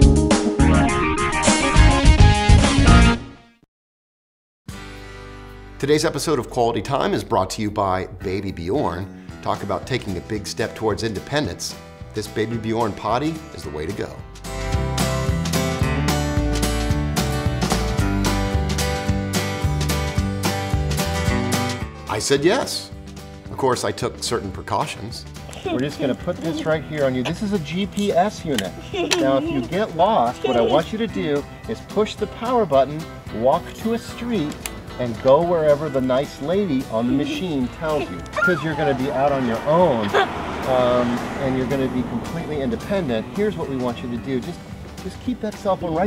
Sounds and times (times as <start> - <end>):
Music: 0.0 - 3.6, 4.7 - 46.0
Speech: 5.8 - 14.2, 22.1 - 22.9, 23.5 - 46.0.